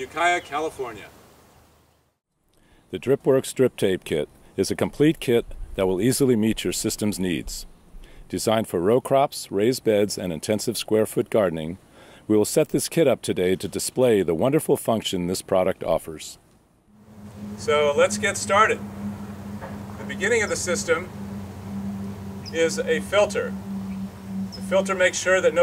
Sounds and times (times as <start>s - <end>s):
Speech: 0.0s - 1.1s, 2.9s - 7.7s, 8.3s - 16.4s, 17.6s - 18.8s, 20.0s - 21.1s, 24.7s - 25.6s.